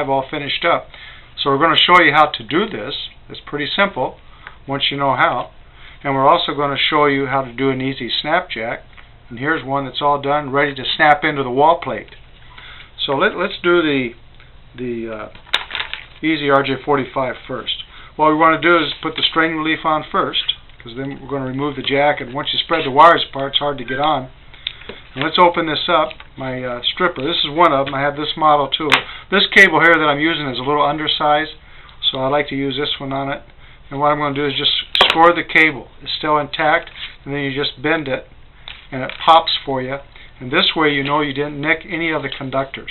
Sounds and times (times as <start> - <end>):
Speech: 0.0 - 12.2, 13.0 - 14.2, 14.8 - 15.4, 16.2 - 24.4, 25.2 - 38.3, 38.9 - 42.9.